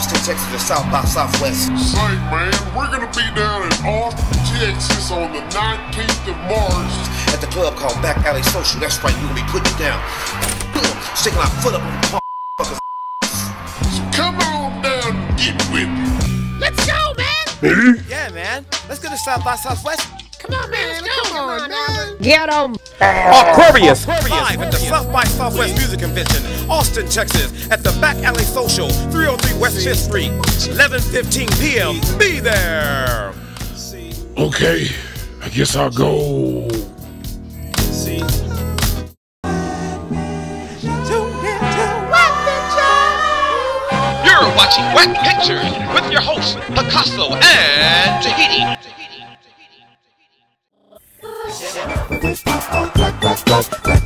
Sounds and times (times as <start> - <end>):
Music: 0.0 - 50.1, 51.0 - 54.0
Speech: 16.7 - 33.4, 34.0 - 36.9, 44.2 - 48.8.